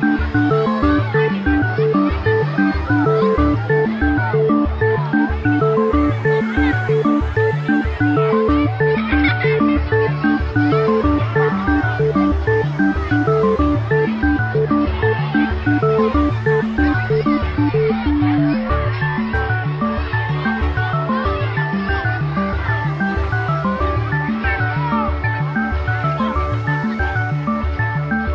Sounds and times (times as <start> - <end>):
Music: 0.0 - 28.3.